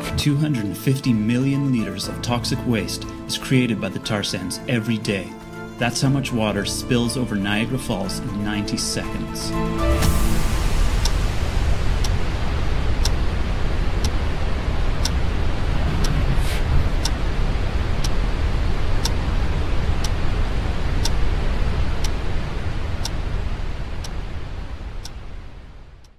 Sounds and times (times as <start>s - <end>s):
Waterfall: 5.4s - 26.0s.